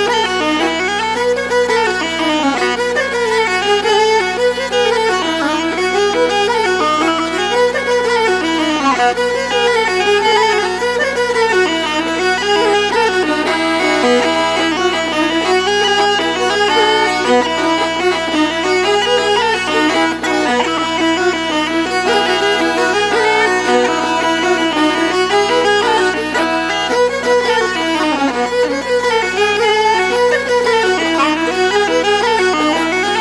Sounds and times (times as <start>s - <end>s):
Violin, fiddle: 0.0s - 33.2s.